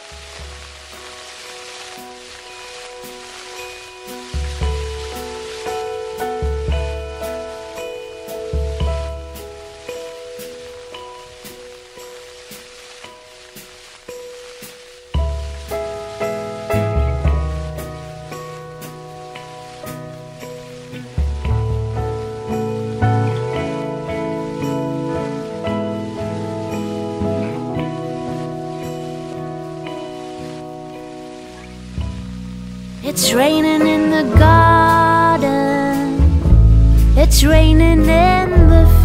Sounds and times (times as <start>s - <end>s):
Music: 0.0s - 39.0s
Rain on surface: 0.0s - 39.0s.